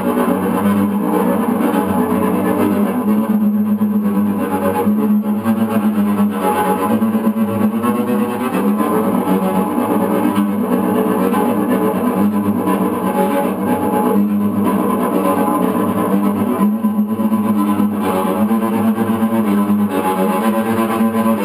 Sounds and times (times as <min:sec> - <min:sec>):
Cello: 0:00.0 - 0:21.4.